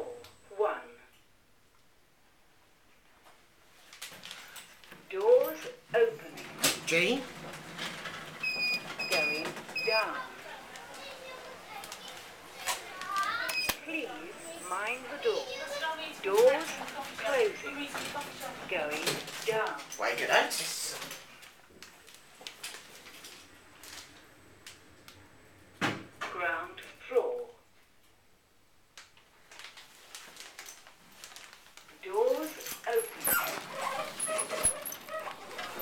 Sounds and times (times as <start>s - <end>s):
Speech: 9.1s - 21.1s, 26.3s - 27.6s, 32.0s - 33.6s.